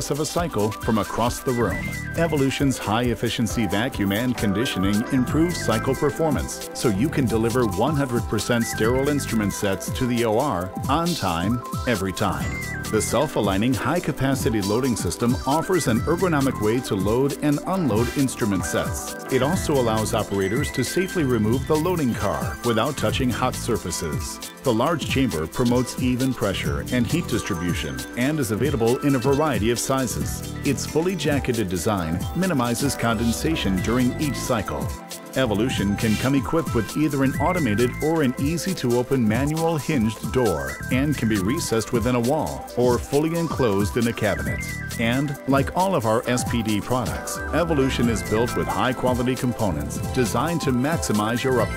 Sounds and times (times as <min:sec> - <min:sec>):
Music: 0:00.0 - 0:51.7
Speech: 0:00.0 - 0:51.7.